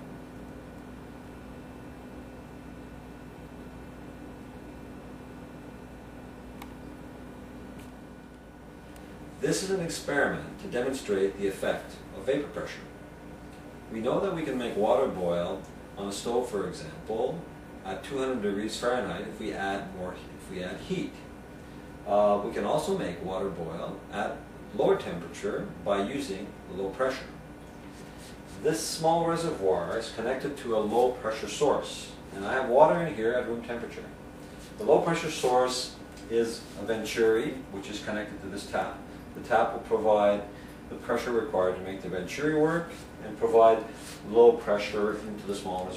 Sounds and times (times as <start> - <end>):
Speech: 9.4 - 12.9, 13.9 - 21.3, 22.0 - 27.4, 28.6 - 34.2, 34.8 - 45.9.